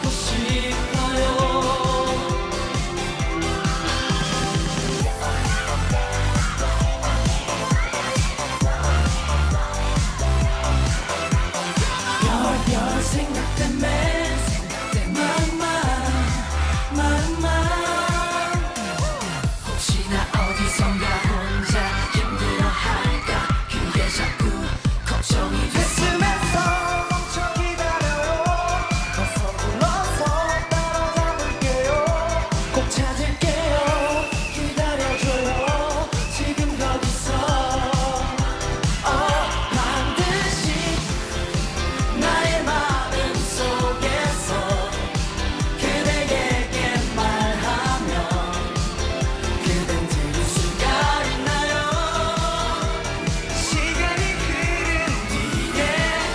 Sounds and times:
Music of Asia: 0.0 - 56.3
Singing: 0.0 - 56.3.

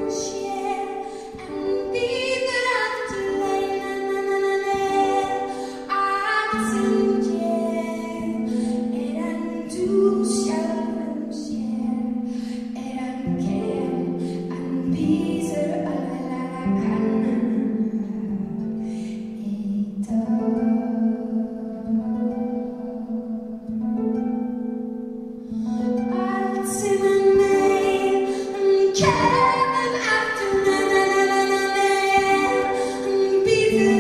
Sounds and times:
Music: 0.0 - 34.0.

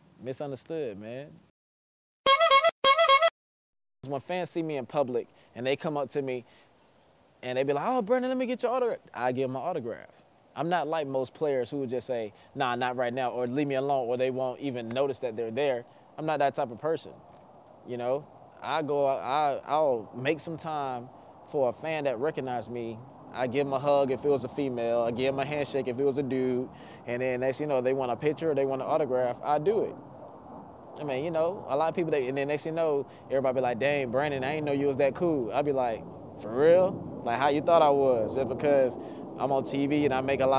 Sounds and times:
Speech: 0.2 - 1.4, 4.0 - 6.4, 7.4 - 17.2, 17.9 - 30.0, 31.0 - 40.5.

